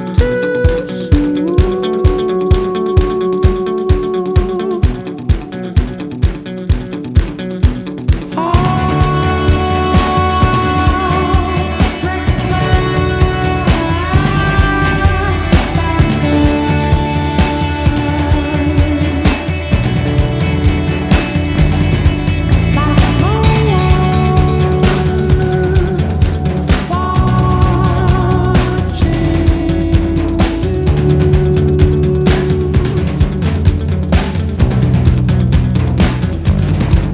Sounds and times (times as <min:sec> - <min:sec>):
Drum kit: 0:00.0 - 0:37.1
Bass drum: 0:00.1 - 0:37.1.